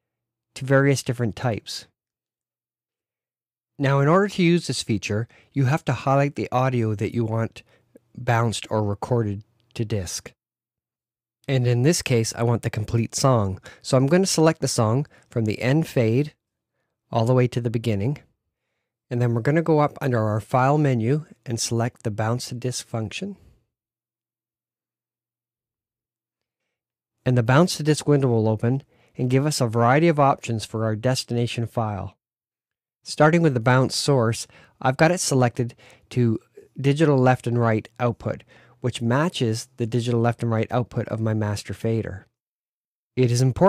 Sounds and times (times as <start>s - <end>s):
Speech: 0.6s - 2.0s, 3.8s - 10.4s, 11.5s - 16.4s, 17.1s - 18.3s, 19.1s - 23.4s, 27.2s - 32.2s, 33.1s - 42.3s, 43.2s - 43.6s.